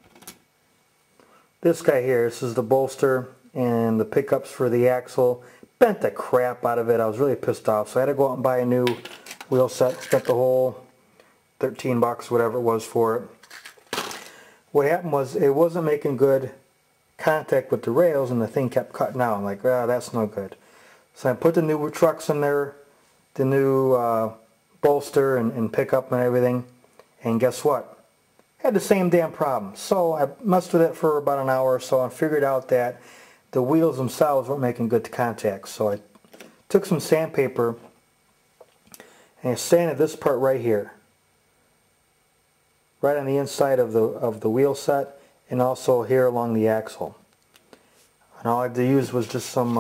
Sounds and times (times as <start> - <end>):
Speech: 1.6 - 10.9, 11.6 - 13.4, 14.7 - 20.6, 21.2 - 38.0, 39.4 - 41.1, 43.0 - 47.3, 48.3 - 49.8.